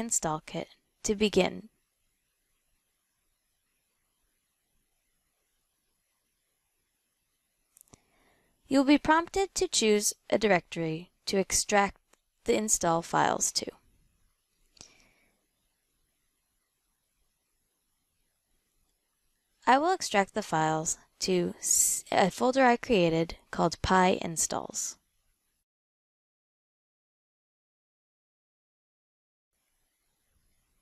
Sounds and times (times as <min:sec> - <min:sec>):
Speech: 0:00.0 - 0:01.7, 0:08.7 - 0:13.8, 0:19.6 - 0:25.0.